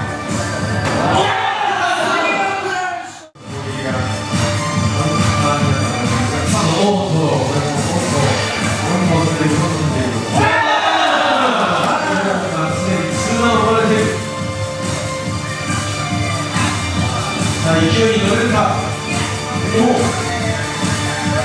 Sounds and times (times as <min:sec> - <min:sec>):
Music: 0:00.0 - 0:02.6, 0:03.3 - 0:21.4
Speech: 0:05.0 - 0:10.3.